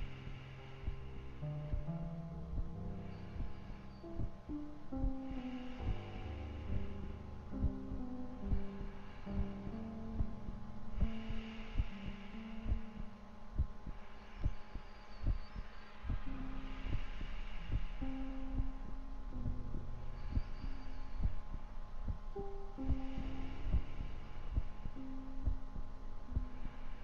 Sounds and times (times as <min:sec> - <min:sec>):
Hum: 0:00.0 - 0:27.0
Throbbing: 0:00.0 - 0:27.0
Heart sounds, heartbeat: 0:12.7 - 0:16.3.